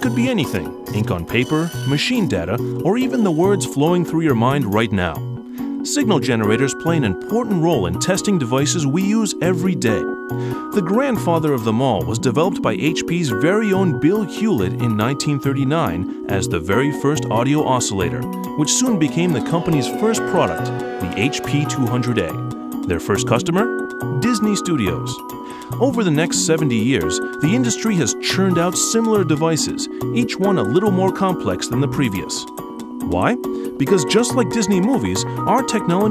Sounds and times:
Speech: 0.0s - 5.2s, 5.8s - 10.1s, 10.7s - 25.2s, 25.8s - 36.1s
Music: 0.0s - 36.1s.

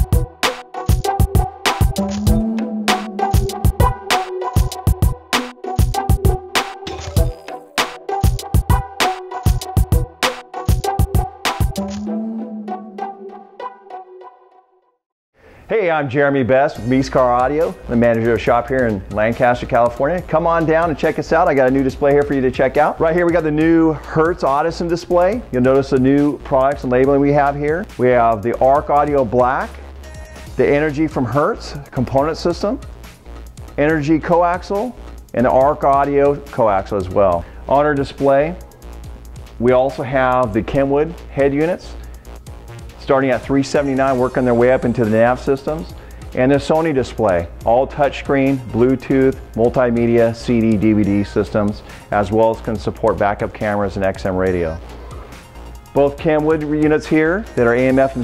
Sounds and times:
Music: 0.0s - 15.0s, 16.1s - 58.2s
Speech: 15.7s - 29.7s, 30.6s - 32.8s, 33.8s - 38.6s, 39.6s - 41.9s, 43.0s - 54.8s, 56.0s - 58.2s.

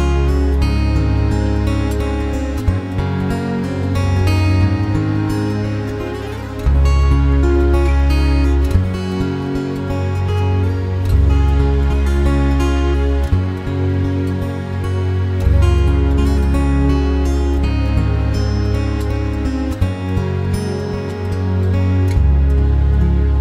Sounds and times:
Tender music: 0.0s - 23.4s.

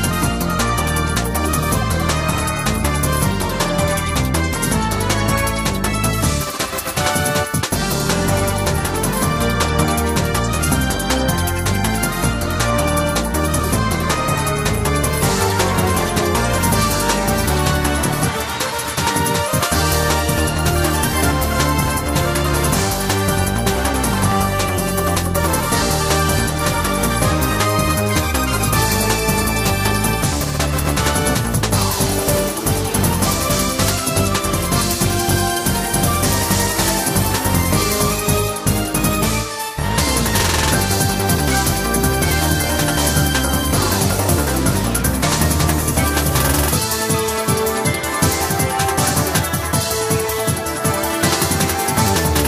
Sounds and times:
Video game music: 0.0s - 52.4s.

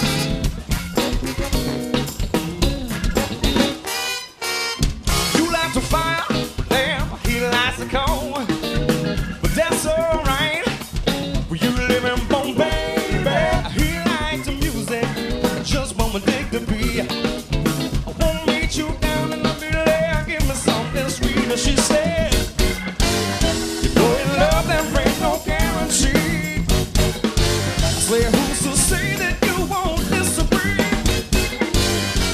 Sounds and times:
Music: 0.0s - 32.3s.

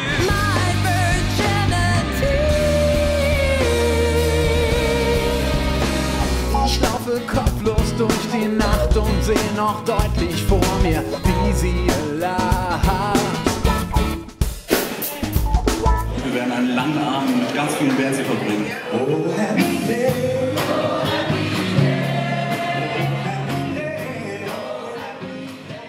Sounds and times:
Rhythm and blues: 0.0s - 25.8s
Ska: 0.0s - 25.8s
Speech: 16.2s - 20.0s.

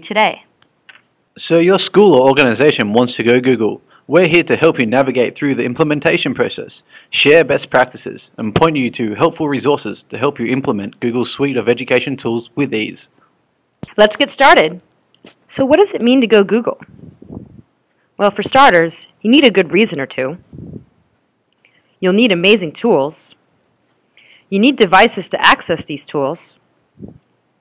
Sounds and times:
Speech: 1.4s - 13.1s, 24.6s - 26.6s.

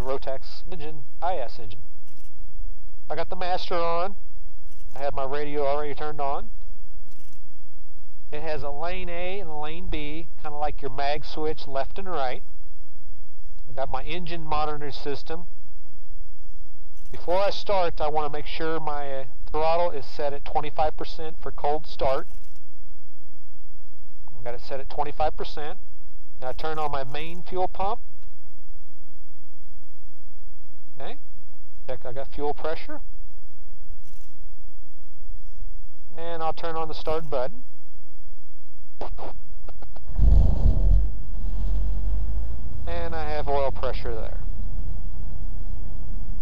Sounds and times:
Speech: 0.0s - 1.8s, 3.1s - 4.2s, 5.0s - 6.5s, 8.4s - 12.4s, 13.8s - 15.5s, 17.2s - 22.3s, 24.4s - 25.8s, 26.4s - 28.0s, 31.0s - 31.2s, 31.9s - 33.1s, 36.2s - 37.6s, 39.0s - 39.4s, 42.9s - 44.4s.

